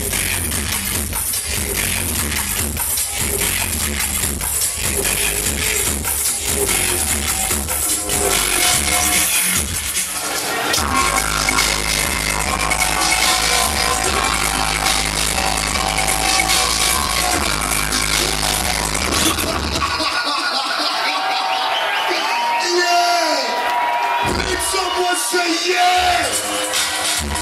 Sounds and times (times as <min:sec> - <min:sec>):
Dubstep: 0:00.0 - 0:22.0, 0:24.2 - 0:25.0, 0:25.8 - 0:27.4.